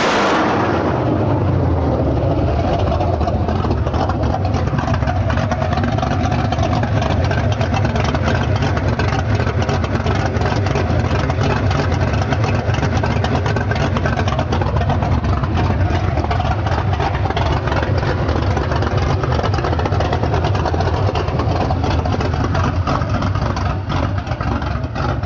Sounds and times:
Heavy engine (low frequency): 0.0s - 25.2s
Vehicle: 0.0s - 25.2s.

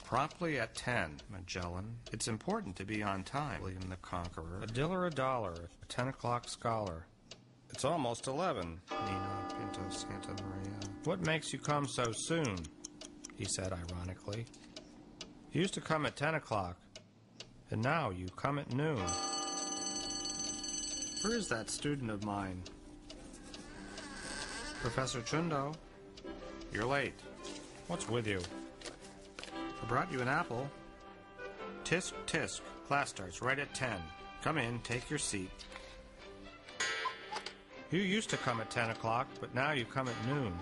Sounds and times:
Speech: 0.0s - 7.1s, 7.7s - 12.7s, 13.4s - 14.5s, 15.5s - 16.8s, 17.7s - 19.1s, 21.2s - 22.7s, 24.8s - 25.8s, 26.8s - 27.2s, 27.9s - 28.5s, 29.8s - 30.7s, 31.8s - 35.6s, 37.9s - 40.6s
Music: 9.0s - 11.4s, 24.6s - 40.6s.

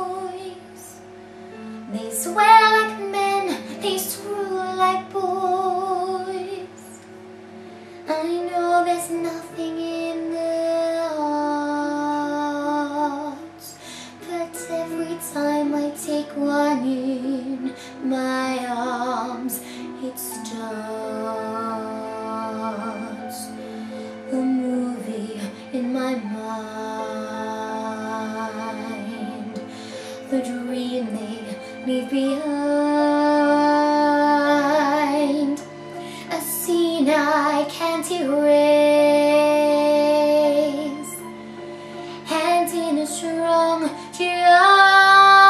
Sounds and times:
Music: 0.0s - 45.4s
Female singing: 1.9s - 7.0s, 8.1s - 23.6s, 24.3s - 41.3s, 42.2s - 45.4s.

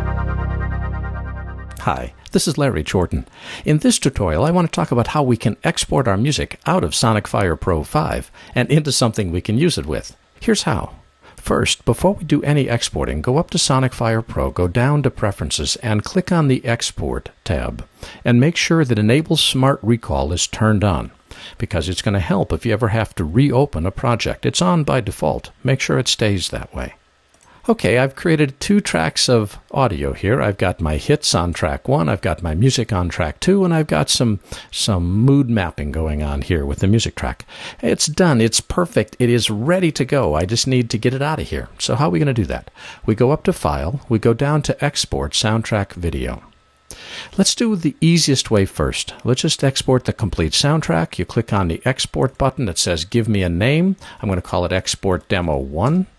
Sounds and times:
Speech: 1.7s - 27.0s, 27.6s - 46.6s, 47.3s - 56.1s.

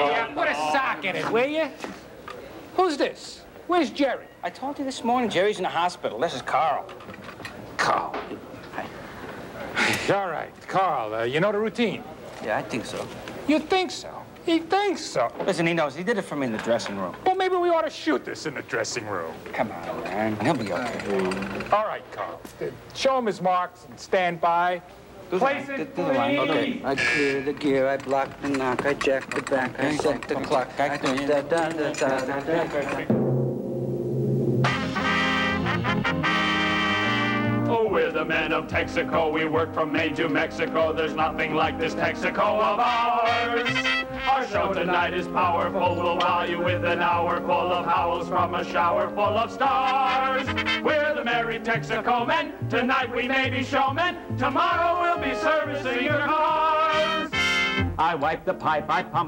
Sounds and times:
Speech: 9.6s - 33.1s
Timpani: 33.0s - 38.0s, 38.7s - 45.5s, 49.3s - 51.4s.

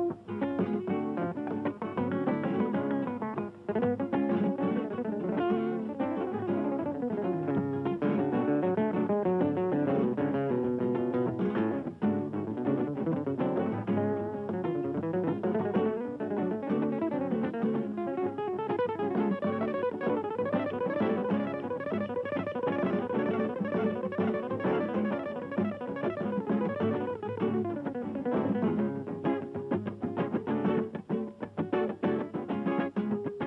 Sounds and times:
Acoustic guitar: 0.0s - 33.4s.

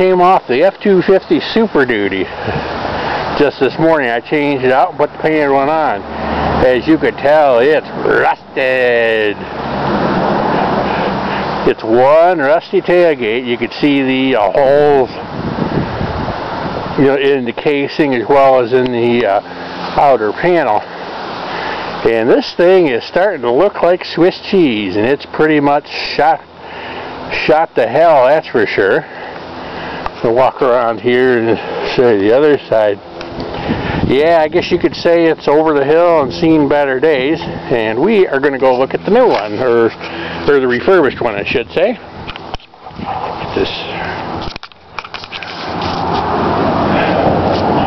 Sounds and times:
Speech: 0.0s - 2.3s, 3.4s - 6.0s, 6.6s - 9.4s, 11.6s - 15.2s, 17.0s - 19.4s, 20.0s - 20.8s, 22.0s - 26.4s, 27.3s - 29.1s, 30.2s - 33.0s, 34.1s - 42.0s, 43.5s - 44.2s.

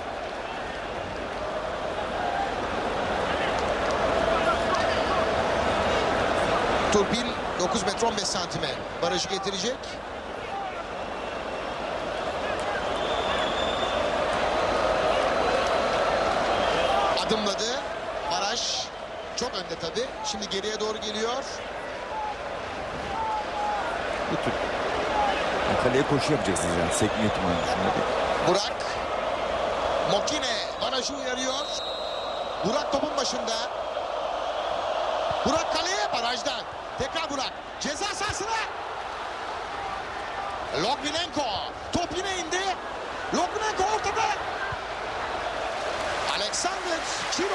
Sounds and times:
Speech: 6.9s - 10.7s, 25.7s - 29.0s, 30.1s - 31.8s.

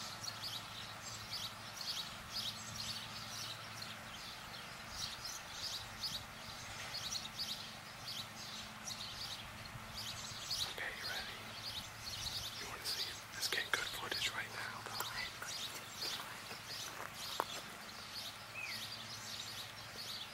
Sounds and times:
Chirp, tweet: 0.0s - 20.3s.

